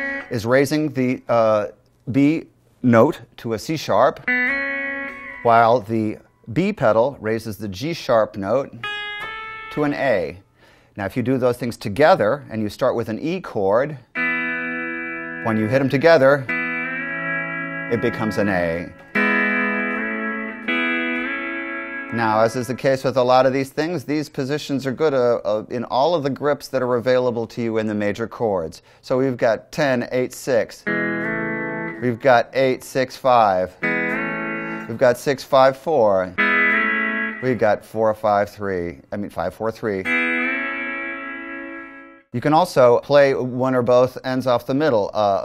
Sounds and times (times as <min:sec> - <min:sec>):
Steel guitar, slide guitar: 0:00.0 - 0:00.3, 0:04.2 - 0:05.5, 0:14.2 - 0:23.1, 0:30.8 - 0:32.2, 0:33.8 - 0:35.3, 0:36.4 - 0:37.8, 0:40.0 - 0:42.2
Speech: 0:00.3 - 0:04.2, 0:05.4 - 0:08.8, 0:09.7 - 0:10.4, 0:11.0 - 0:14.1, 0:15.4 - 0:16.5, 0:17.9 - 0:19.0, 0:22.1 - 0:30.9, 0:32.0 - 0:33.8, 0:34.9 - 0:36.4, 0:37.4 - 0:40.1, 0:42.4 - 0:45.4.